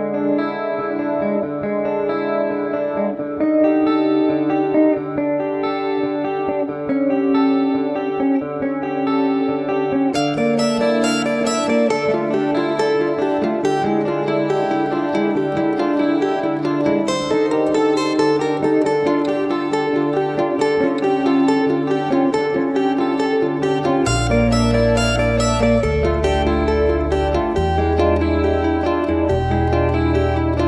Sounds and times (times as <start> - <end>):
Chorus effect: 0.0 - 30.6
Music: 0.0 - 30.6.